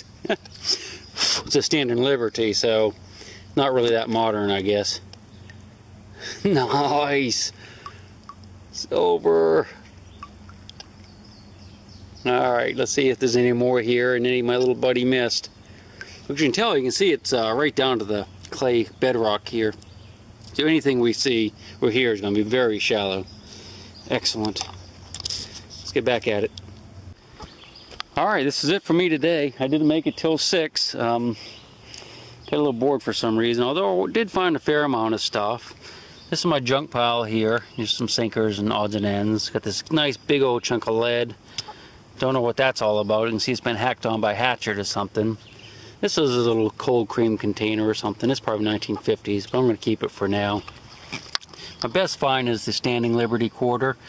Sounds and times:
Outside, rural or natural: 0:00.0 - 0:54.0
Speech: 0:01.4 - 0:03.0, 0:03.6 - 0:05.0, 0:06.4 - 0:07.6, 0:08.8 - 0:09.8, 0:12.2 - 0:15.5, 0:16.3 - 0:19.8, 0:20.5 - 0:23.3, 0:24.1 - 0:24.7, 0:25.8 - 0:26.5, 0:28.2 - 0:31.4, 0:32.5 - 0:35.7, 0:36.3 - 0:41.4, 0:42.2 - 0:45.4, 0:46.0 - 0:50.7, 0:51.8 - 0:54.0.

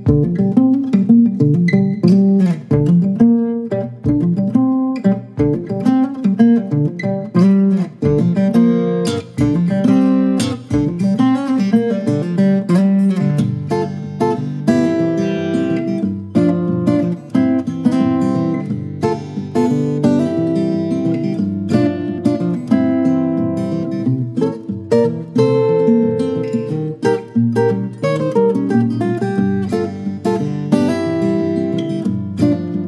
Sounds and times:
Acoustic guitar: 0:00.0 - 0:32.8
Blues: 0:00.0 - 0:32.8
Inside, small room: 0:00.0 - 0:32.8.

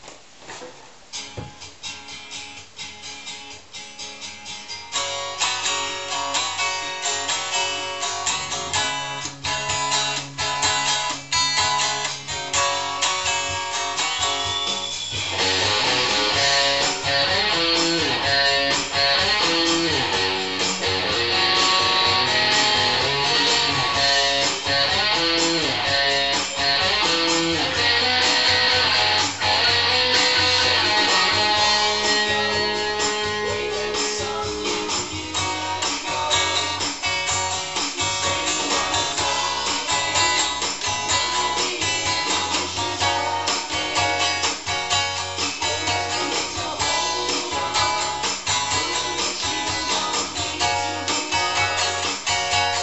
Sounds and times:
Acoustic guitar: 0:00.0 - 0:52.8.

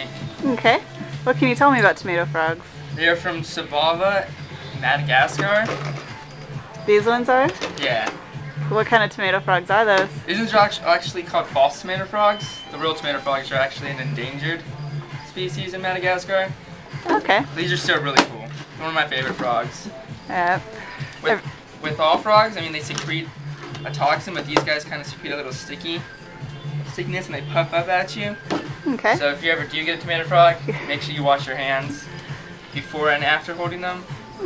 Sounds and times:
Music: 0:00.0 - 0:34.4
Speech: 0:00.4 - 0:02.6, 0:17.1 - 0:18.5, 0:20.3 - 0:20.6, 0:28.9 - 0:29.4.

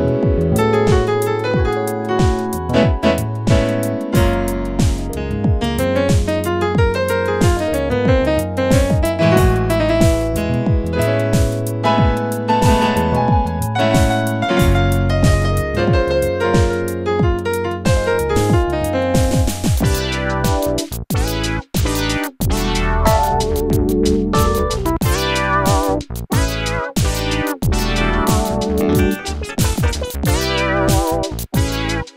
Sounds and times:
Piano: 0:00.0 - 0:32.1
Synthesizer: 0:00.0 - 0:32.1.

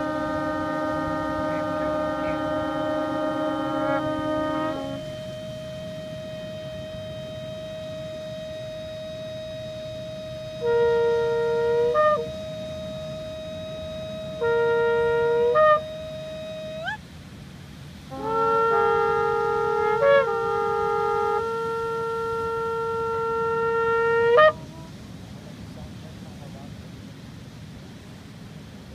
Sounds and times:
Shofar: 0:00.0 - 0:17.0, 0:17.9 - 0:25.2
Wind instrument, woodwind instrument: 0:00.0 - 0:17.1, 0:18.0 - 0:25.3.

